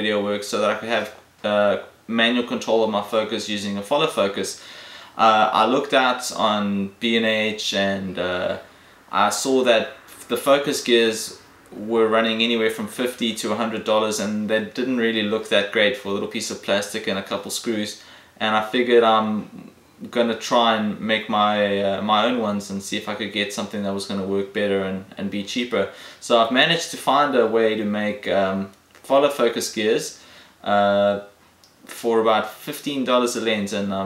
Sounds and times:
Speech: 0.0s - 4.6s, 5.2s - 34.0s.

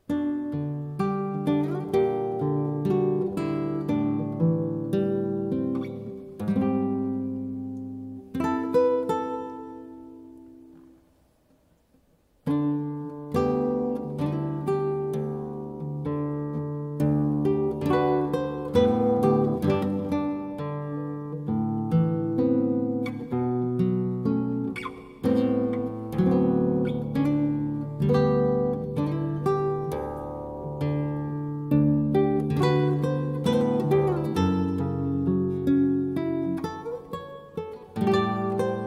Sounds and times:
Acoustic guitar: 0.0s - 38.8s
Strum: 0.0s - 38.8s.

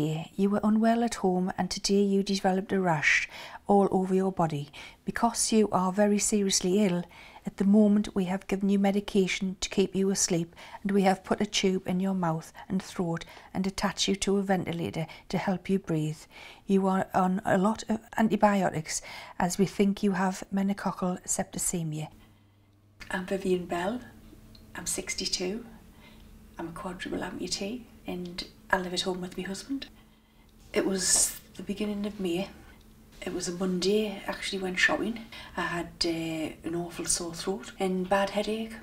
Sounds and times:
Speech: 0.0s - 22.2s, 23.0s - 25.8s, 26.6s - 29.9s, 30.7s - 38.8s.

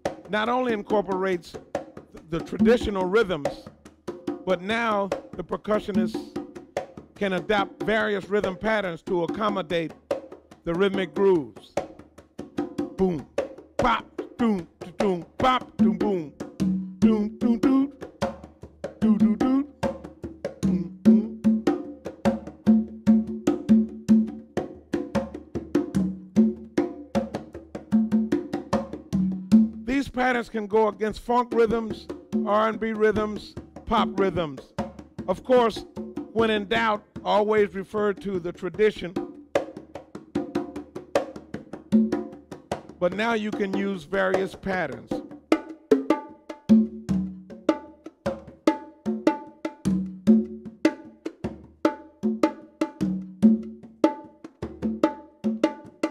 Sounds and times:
Percussion: 0.0s - 56.1s.

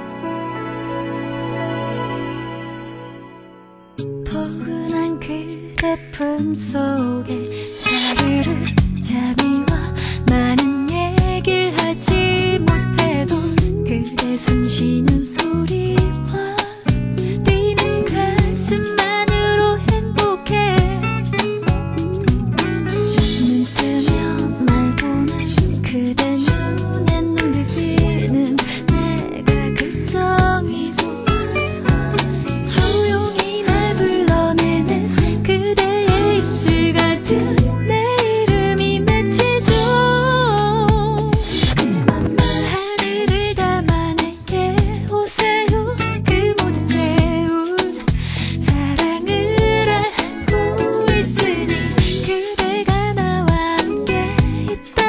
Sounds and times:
Rhythm and blues: 7.3s - 55.0s.

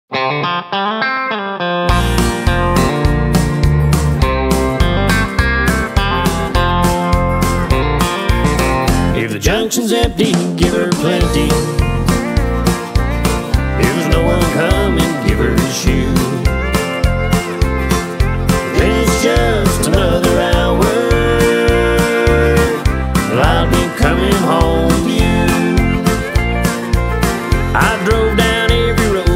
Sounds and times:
Effects unit: 0.1s - 9.2s, 11.6s - 29.3s
Music: 0.1s - 29.3s
Singing: 9.2s - 11.7s, 13.8s - 16.4s, 18.7s - 26.1s.

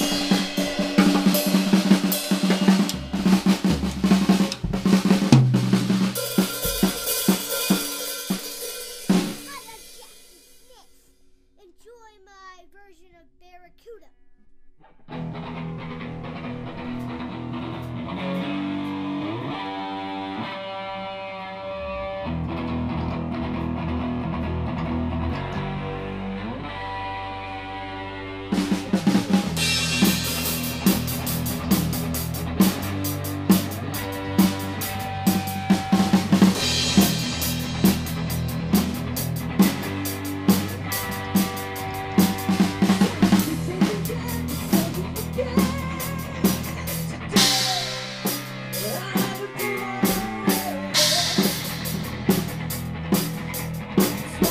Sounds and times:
Music: 0.0s - 54.5s.

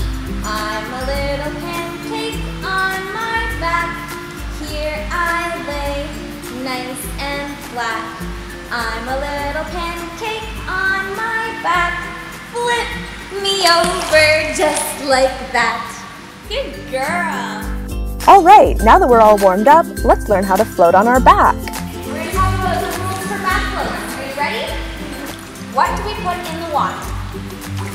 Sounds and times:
Music: 0.0s - 27.9s
Speech: 18.3s - 21.6s.

